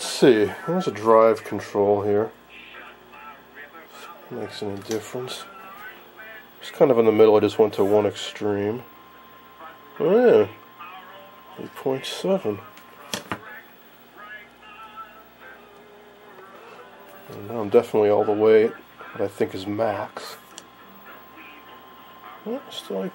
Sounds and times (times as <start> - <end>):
Speech: 0.0 - 8.9, 9.6 - 15.3, 17.2 - 20.4, 21.3 - 23.1
Inside, small room: 0.0 - 23.1.